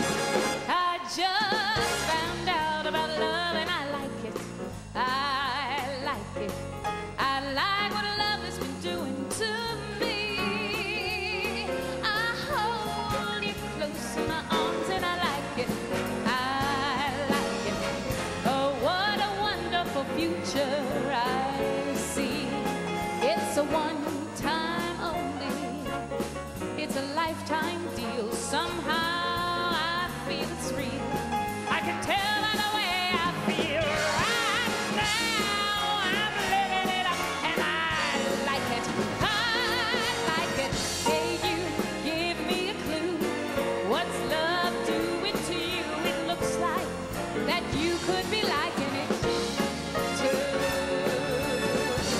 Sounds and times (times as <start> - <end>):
Music: 0.0 - 52.1
Female singing: 0.7 - 6.6, 7.2 - 25.8, 26.8 - 52.1.